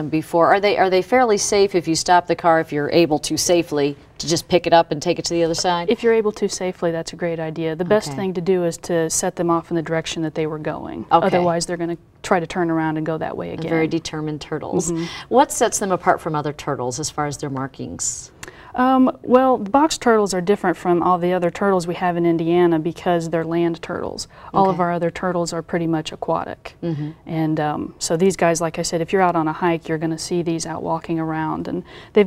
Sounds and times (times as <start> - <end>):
Speech: 0.0 - 32.2.